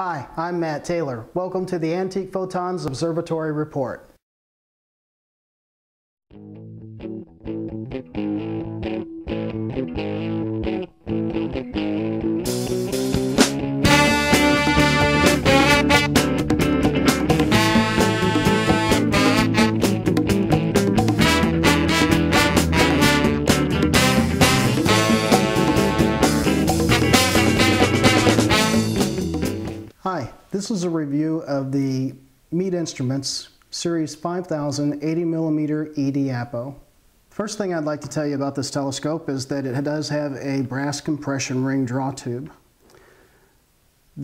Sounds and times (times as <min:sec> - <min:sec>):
Effects unit: 0:06.3 - 0:29.9
Music: 0:06.3 - 0:30.0.